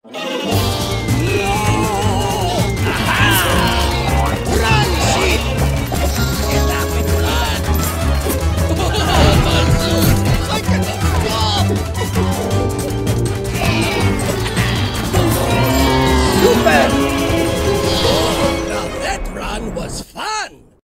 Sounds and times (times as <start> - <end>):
Music: 0.0 - 19.9
Speech: 18.1 - 20.7.